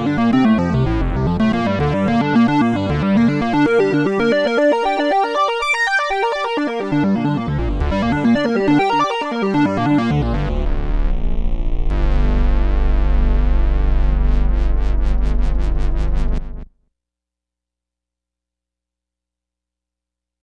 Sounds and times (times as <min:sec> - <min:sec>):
Music: 0:00.0 - 0:16.8.